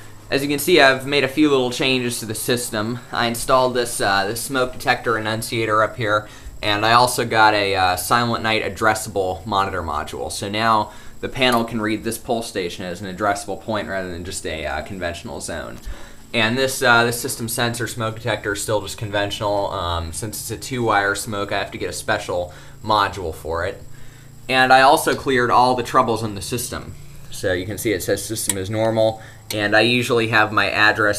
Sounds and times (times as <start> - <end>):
Speech: 0.3 - 23.9, 24.5 - 31.1.